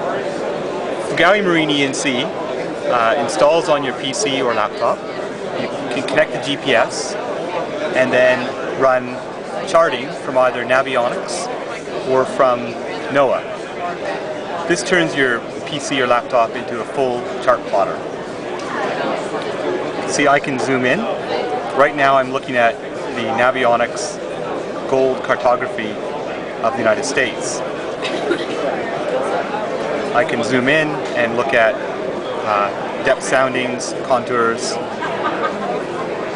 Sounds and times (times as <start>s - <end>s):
Speech: 0.0s - 35.5s.